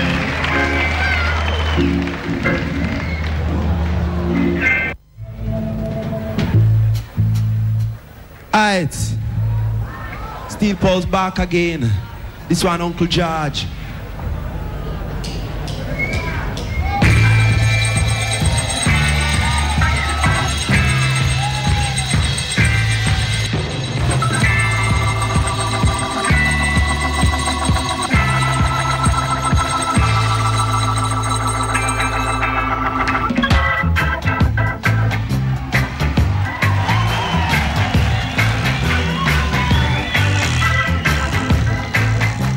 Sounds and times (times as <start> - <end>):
Speech: 8.5 - 9.2, 9.9 - 13.8
Jazz: 15.1 - 42.5.